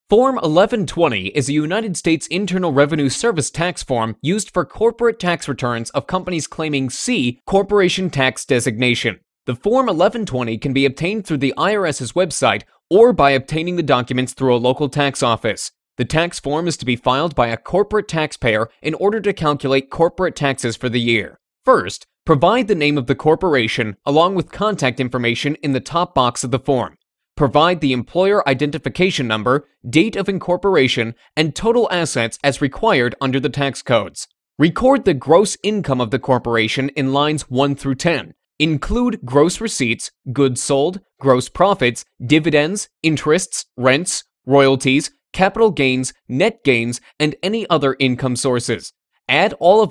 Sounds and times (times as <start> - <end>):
Speech: 0.1 - 49.9.